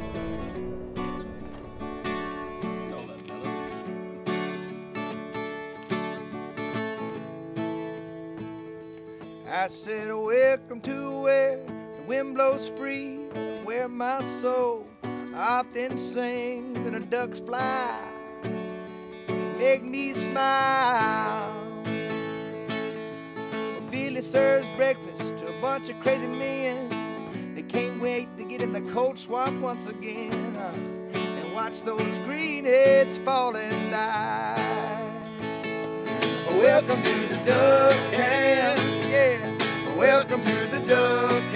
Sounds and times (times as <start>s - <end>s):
Music: 0.0s - 41.5s.